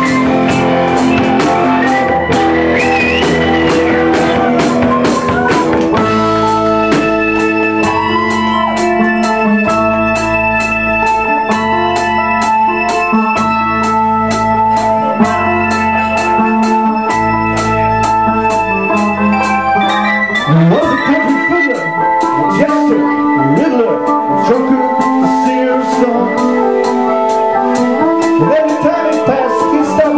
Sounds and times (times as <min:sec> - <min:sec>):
Music: 0:00.0 - 0:30.1
Speech: 0:20.5 - 0:26.4, 0:28.4 - 0:30.1.